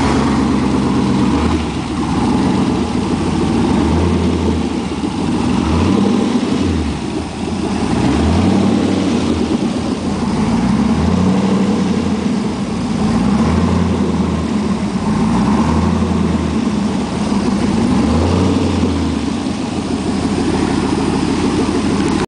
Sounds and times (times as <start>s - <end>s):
Medium engine (mid frequency): 0.0s - 22.2s.